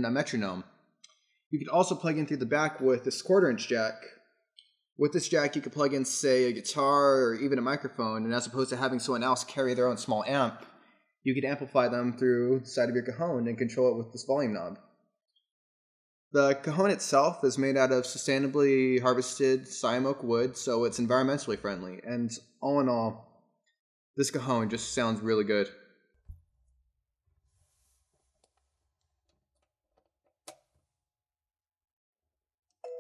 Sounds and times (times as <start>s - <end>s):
Speech: 0.0s - 0.7s, 1.6s - 4.1s, 5.0s - 10.7s, 11.3s - 14.8s, 16.4s - 23.2s, 24.2s - 25.7s.